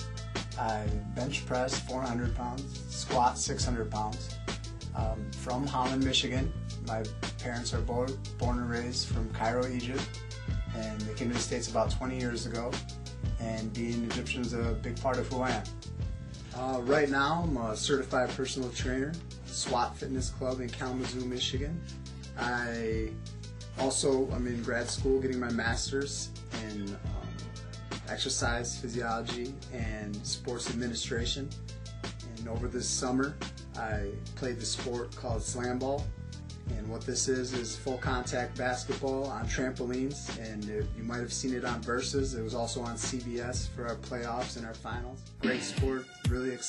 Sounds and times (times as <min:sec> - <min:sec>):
Music: 0:00.0 - 0:46.6
Speech: 0:00.5 - 0:04.4, 0:05.0 - 0:10.1, 0:10.7 - 0:12.8, 0:13.4 - 0:15.7, 0:16.5 - 0:21.8, 0:22.4 - 0:23.2, 0:23.8 - 0:27.3, 0:28.0 - 0:31.5, 0:32.2 - 0:36.1, 0:36.7 - 0:46.6.